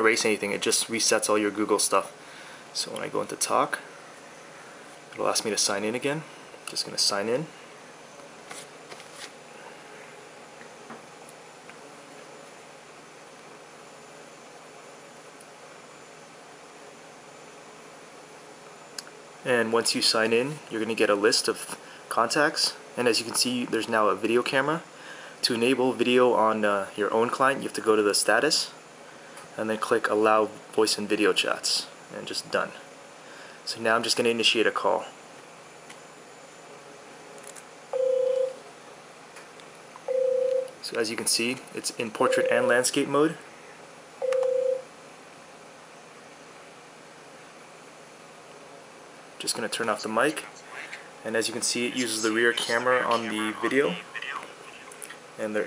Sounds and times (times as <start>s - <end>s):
Speech: 0.0s - 2.1s, 2.8s - 3.9s, 5.2s - 7.5s, 19.4s - 28.8s, 29.6s - 32.8s, 33.7s - 35.2s, 40.8s - 43.4s, 49.4s - 55.6s.